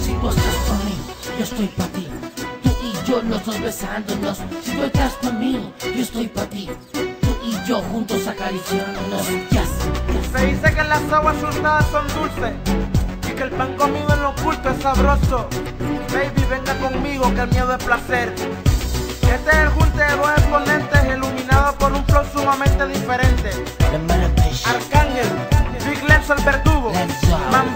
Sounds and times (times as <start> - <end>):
Music of Africa: 0.0 - 27.7.